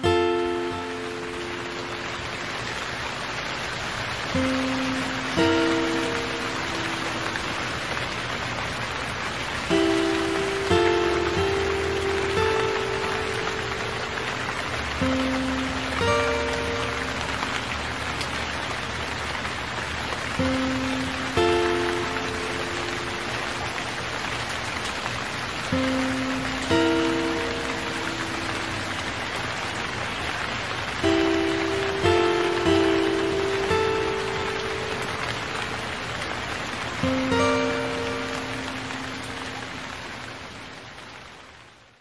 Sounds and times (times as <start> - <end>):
Music: 0.0 - 2.6, 4.3 - 8.0, 9.6 - 18.8, 20.2 - 24.1, 25.6 - 29.8, 30.4 - 35.8, 36.9 - 39.7
Rain on surface: 0.0 - 42.0.